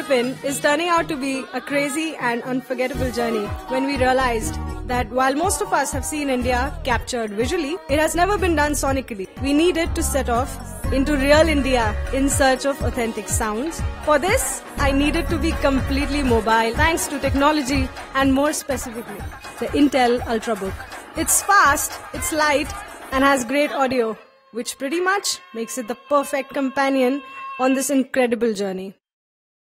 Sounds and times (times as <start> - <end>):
Music: 0.0 - 28.2
Speech: 0.0 - 29.0.